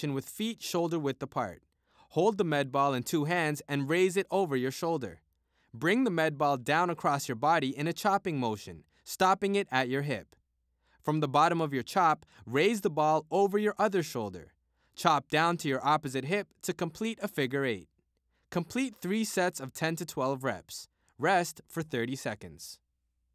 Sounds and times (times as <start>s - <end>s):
Speech: 0.0s - 5.2s, 5.8s - 10.4s, 11.0s - 17.9s, 18.5s - 22.8s.